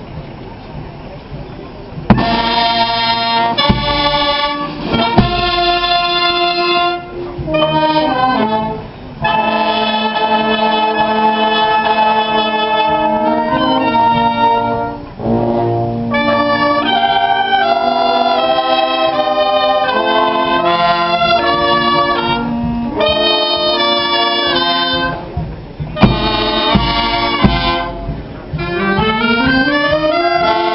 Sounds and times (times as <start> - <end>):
Music: 0.8 - 30.7.